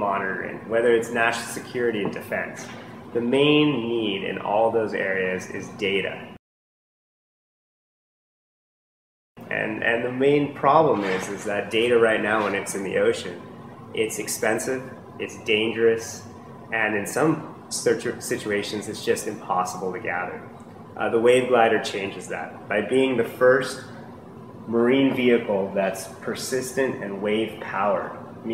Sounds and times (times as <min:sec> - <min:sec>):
Speech: 0:00.0 - 0:06.4, 0:09.4 - 0:24.0, 0:24.7 - 0:28.5.